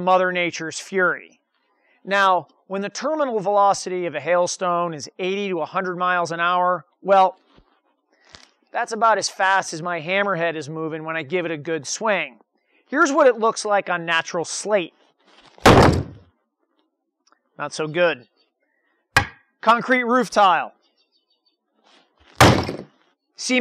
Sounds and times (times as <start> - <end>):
Speech: 0.0 - 1.4, 2.1 - 7.4, 8.8 - 15.0, 17.6 - 18.3, 19.7 - 20.8, 23.4 - 23.6.